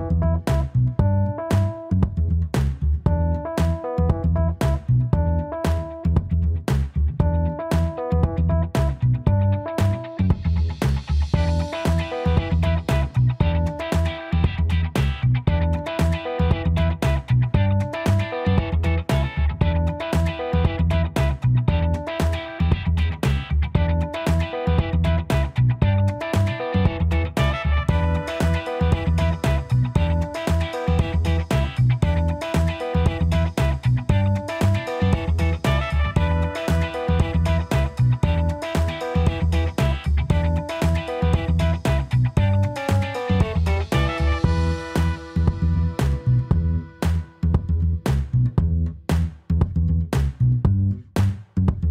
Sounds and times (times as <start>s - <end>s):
Music: 0.0s - 51.9s.